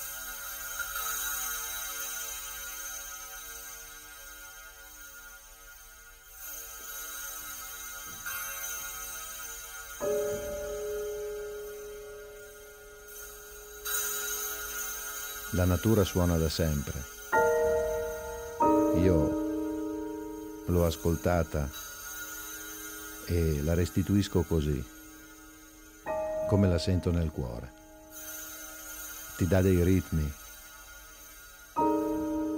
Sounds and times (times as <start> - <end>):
Piano: 8.2 - 32.5.